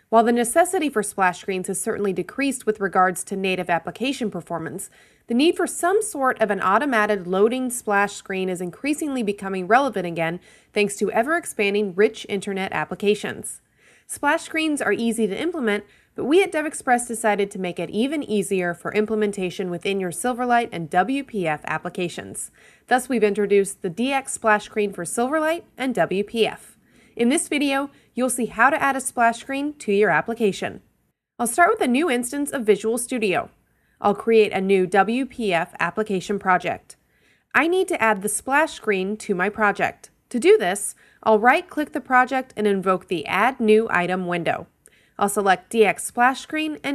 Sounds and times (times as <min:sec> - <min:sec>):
Speech: 0:00.1 - 0:30.8, 0:31.4 - 0:37.0, 0:37.6 - 0:46.9.